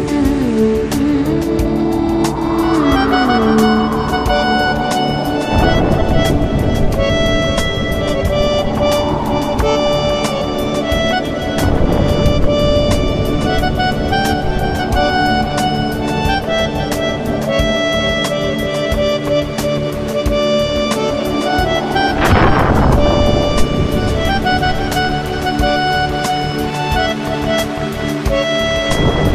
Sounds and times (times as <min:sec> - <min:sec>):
Music: 0:00.0 - 0:29.3.